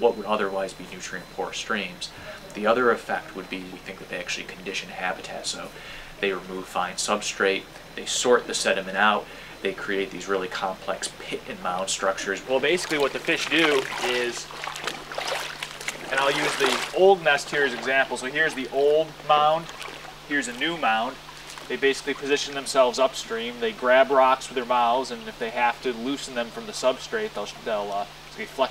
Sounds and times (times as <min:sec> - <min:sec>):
Speech: 0:00.0 - 0:14.5, 0:16.1 - 0:19.7, 0:20.3 - 0:28.7
Trickle, dribble: 0:11.7 - 0:28.7
Stream: 0:11.8 - 0:28.7.